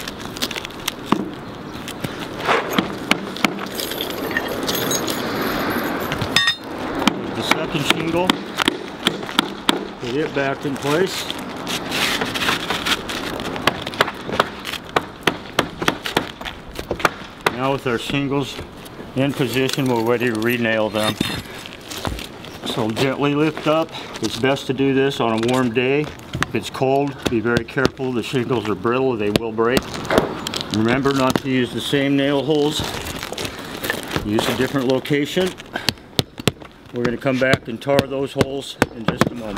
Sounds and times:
Outside, rural or natural: 0.0 - 39.5
Speech: 7.4 - 8.4, 10.0 - 11.3, 17.5 - 18.6, 19.2 - 21.3, 22.7 - 29.8, 30.7 - 32.9, 34.2 - 35.6, 36.9 - 39.5.

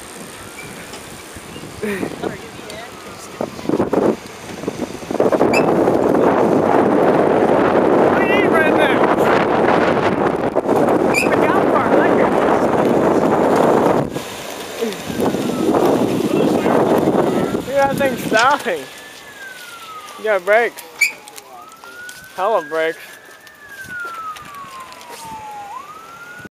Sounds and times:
Vehicle: 0.0 - 26.5
Speech: 20.2 - 23.0.

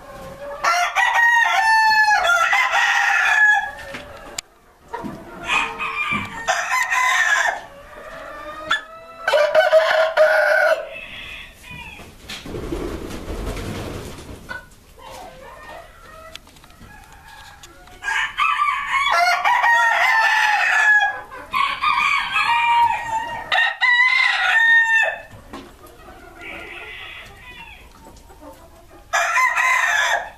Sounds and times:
Cluck: 3.8 - 6.2, 14.5 - 16.4, 25.3 - 29.2.

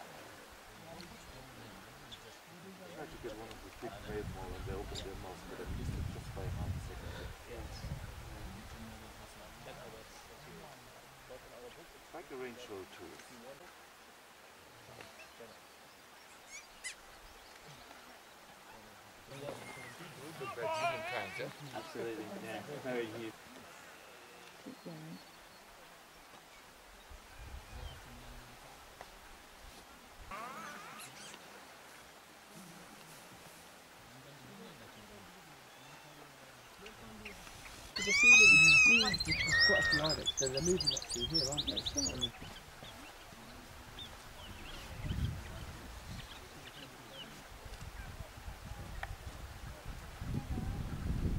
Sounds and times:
Speech: 0.7 - 13.8, 18.7 - 23.7, 34.0 - 37.4, 38.0 - 49.0
Chirp, tweet: 39.1 - 45.4.

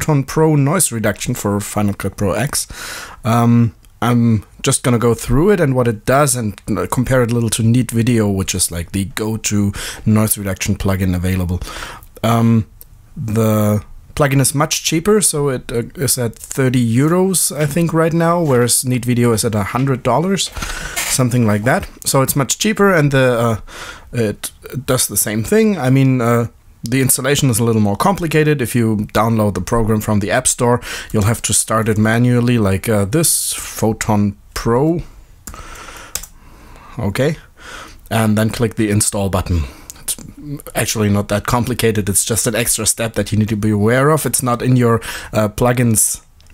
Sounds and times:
Speech: 0.0 - 11.6, 12.2 - 35.1, 37.0 - 37.5, 38.1 - 46.3.

